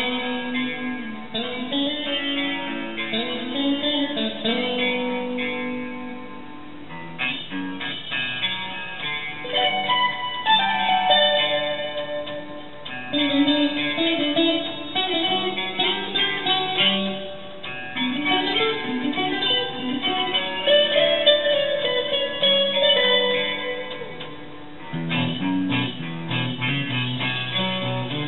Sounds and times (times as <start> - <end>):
Plucked string instrument: 0.0 - 28.2.